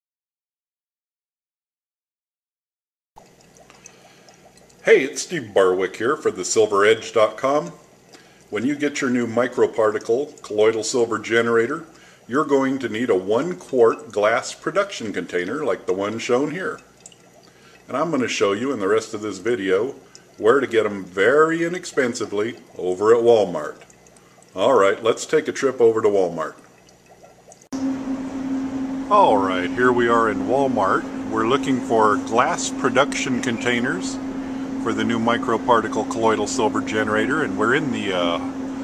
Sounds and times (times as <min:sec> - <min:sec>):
Speech: 0:04.8 - 0:07.8, 0:08.5 - 0:16.8, 0:17.9 - 0:23.8, 0:24.6 - 0:26.6, 0:29.1 - 0:34.2, 0:34.8 - 0:38.6.